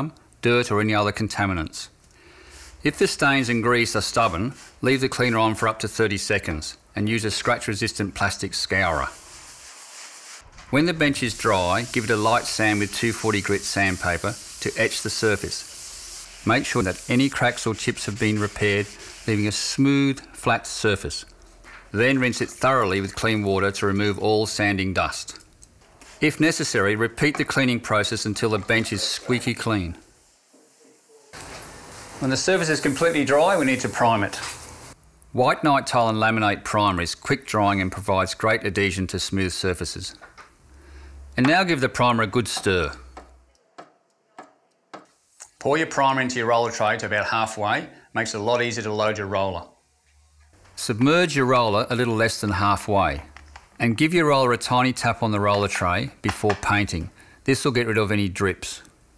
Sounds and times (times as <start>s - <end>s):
Speech: 0.0s - 2.0s, 2.8s - 9.2s, 10.7s - 15.6s, 16.4s - 21.3s, 21.9s - 25.4s, 26.2s - 30.0s, 32.2s - 34.5s, 35.4s - 40.2s, 41.4s - 43.0s, 45.6s - 49.8s, 50.8s - 58.9s.